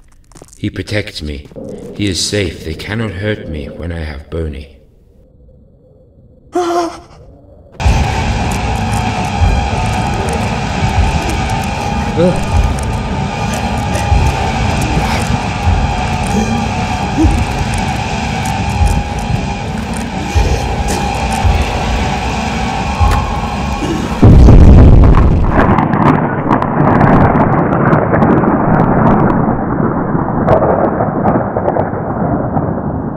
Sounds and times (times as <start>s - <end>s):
Music: 7.8s - 24.9s
Explosion: 7.8s - 33.1s.